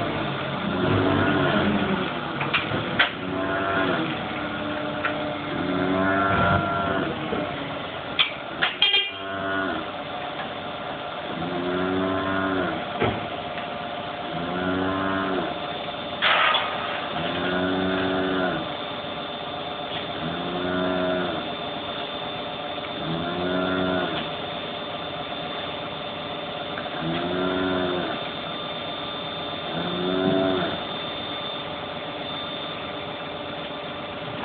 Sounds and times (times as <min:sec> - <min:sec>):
Moo: 0:00.6 - 0:02.0, 0:03.2 - 0:04.8, 0:05.5 - 0:07.2, 0:08.9 - 0:09.9, 0:11.3 - 0:12.8, 0:14.3 - 0:15.6, 0:17.2 - 0:18.7, 0:20.2 - 0:21.5, 0:23.0 - 0:24.2, 0:27.0 - 0:28.2, 0:29.7 - 0:30.8.